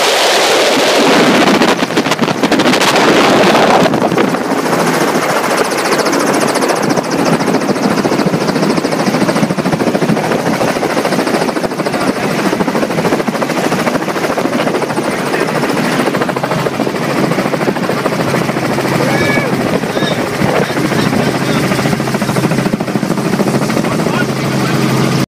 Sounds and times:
Speech: 11.9 - 12.5, 15.0 - 16.0, 23.8 - 24.8.

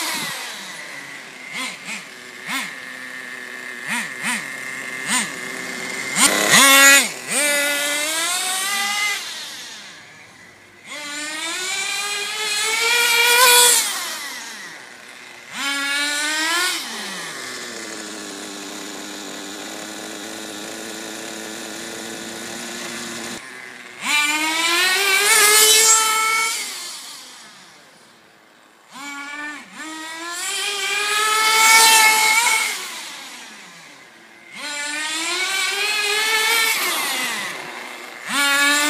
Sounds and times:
Car: 0.0 - 38.8
Accelerating, revving, vroom: 1.5 - 2.8, 3.8 - 5.3, 6.1 - 9.7, 10.9 - 14.7, 15.5 - 17.4, 24.0 - 27.0, 29.0 - 33.5, 34.5 - 38.8.

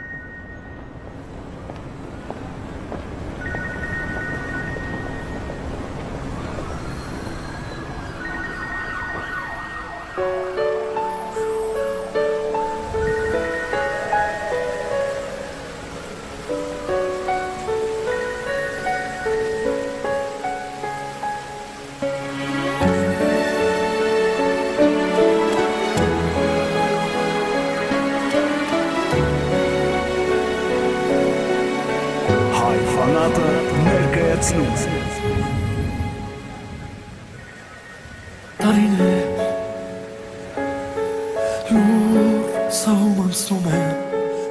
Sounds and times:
Music: 0.0 - 1.1, 7.6 - 44.5
Speech: 32.5 - 35.2.

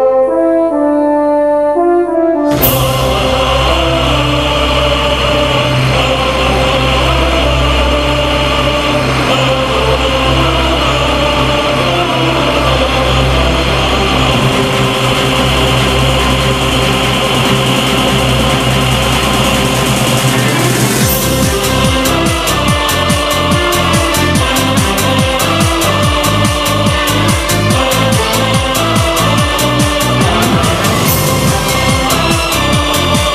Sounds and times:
Classical music: 0.0 - 18.4, 21.0 - 33.3.

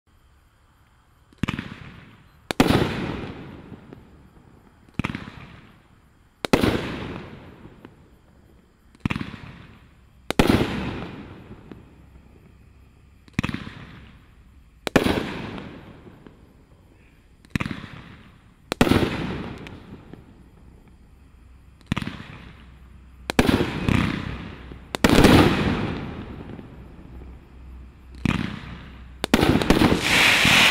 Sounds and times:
Fireworks: 1.3 - 30.7.

